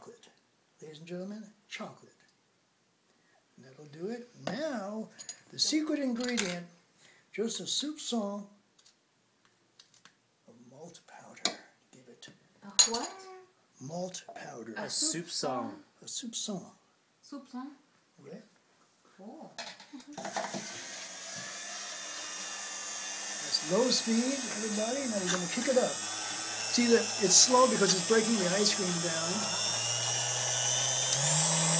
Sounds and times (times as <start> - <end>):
Speech: 13.0 - 16.8, 23.5 - 26.0, 26.8 - 29.5.